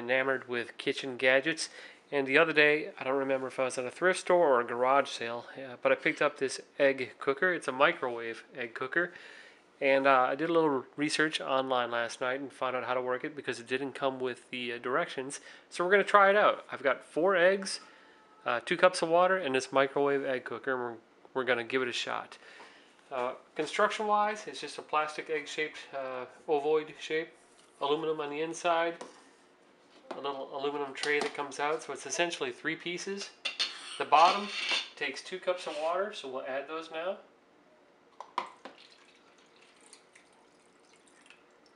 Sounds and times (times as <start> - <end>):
Speech: 0.0 - 9.2, 9.8 - 22.4, 23.1 - 29.0, 30.1 - 33.4, 34.0 - 37.3.